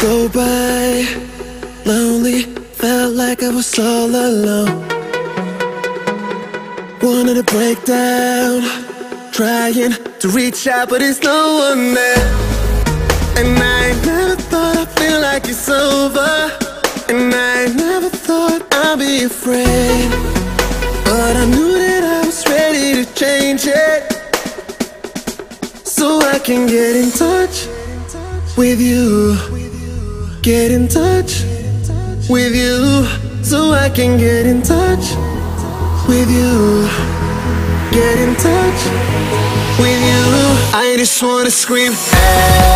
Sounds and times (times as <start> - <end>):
Music: 0.0 - 42.7.